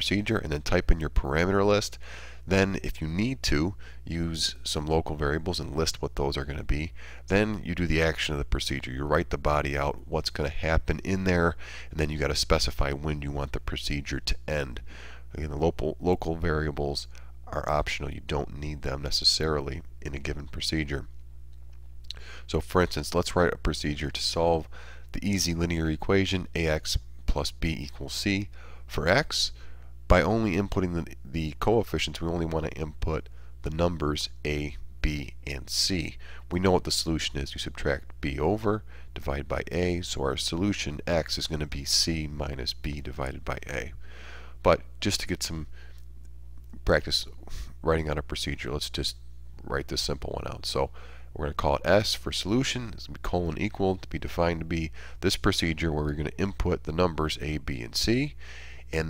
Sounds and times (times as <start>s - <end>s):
Speech: 0.0s - 21.2s, 22.5s - 44.0s, 44.6s - 45.7s, 46.8s - 59.0s.